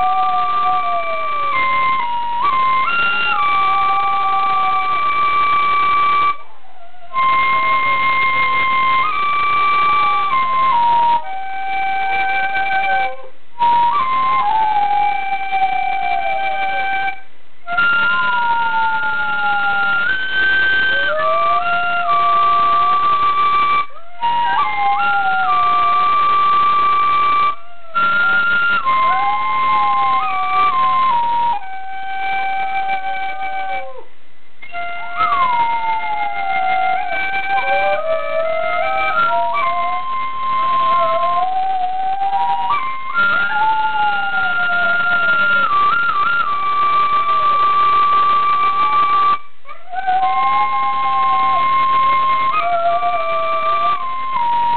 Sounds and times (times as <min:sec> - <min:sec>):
Inside, small room: 0:00.0 - 0:54.7
Music: 0:00.0 - 0:54.7.